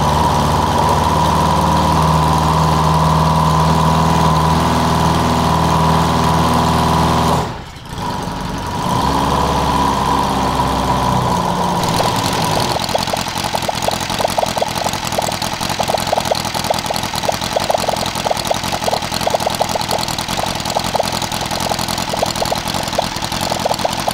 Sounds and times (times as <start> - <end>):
Medium engine (mid frequency): 0.0 - 13.5
Idling: 11.6 - 24.1.